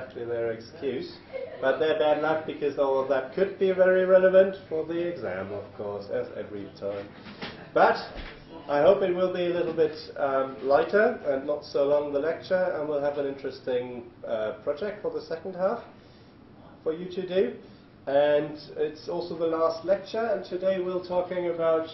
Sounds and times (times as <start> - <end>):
Speech: 0.0 - 15.9, 16.8 - 21.9.